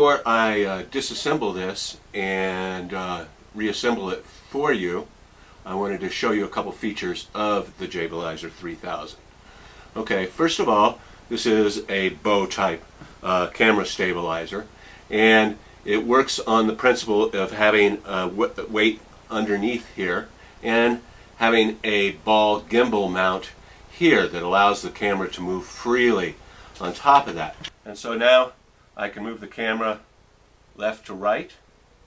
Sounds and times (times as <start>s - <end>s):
Speech: 0.0s - 9.2s, 10.0s - 30.1s, 30.8s - 31.7s.